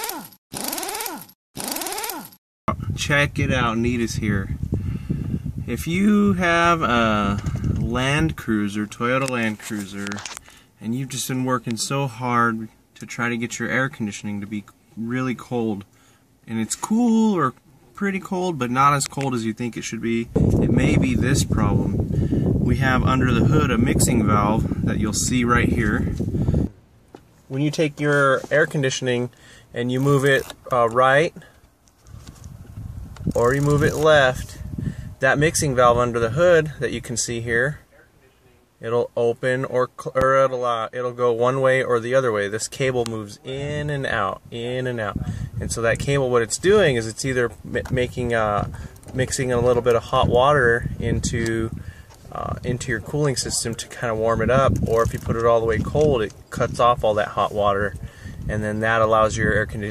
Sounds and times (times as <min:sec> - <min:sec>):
Speech: 0:02.7 - 0:04.6, 0:05.7 - 0:10.2, 0:10.8 - 0:15.9, 0:16.5 - 0:21.9, 0:22.7 - 0:26.1, 0:27.5 - 0:31.5, 0:33.4 - 0:34.6, 0:35.2 - 0:59.9.